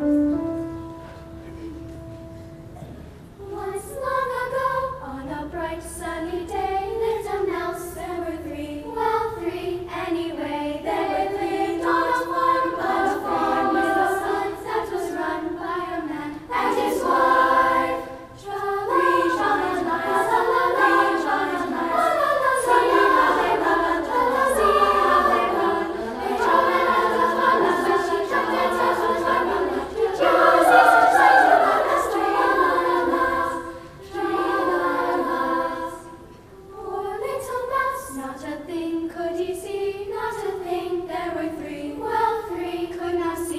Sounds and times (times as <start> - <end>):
Choir: 2.8 - 43.5.